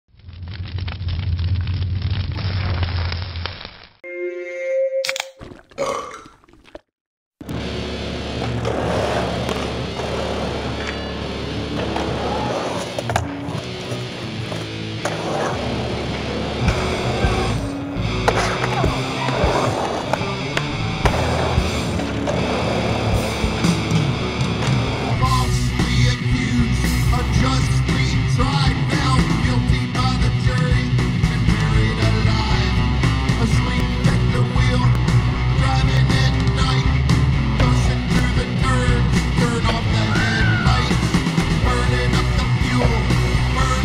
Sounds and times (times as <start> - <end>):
Music: 7.5 - 43.8
Skateboard: 8.2 - 25.2.